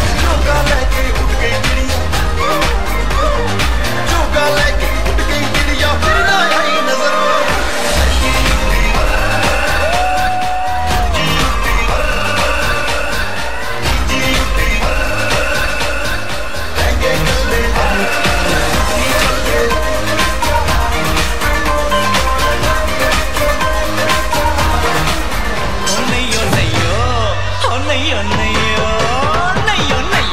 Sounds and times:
Music of Asia: 0.0 - 30.3.

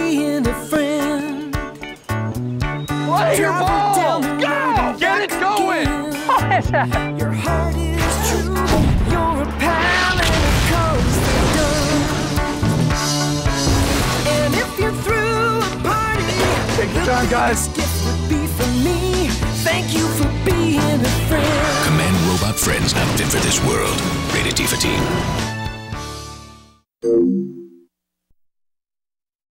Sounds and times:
Music: 0.0 - 26.9
Speech: 3.1 - 5.9, 21.8 - 25.2.

